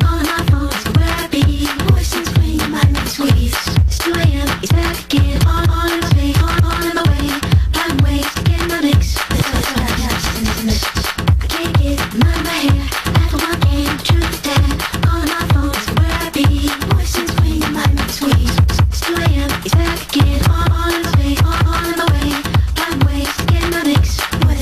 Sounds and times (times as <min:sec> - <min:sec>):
House music: 0:00.0 - 0:24.6
Scratching (performance technique): 0:00.0 - 0:24.6.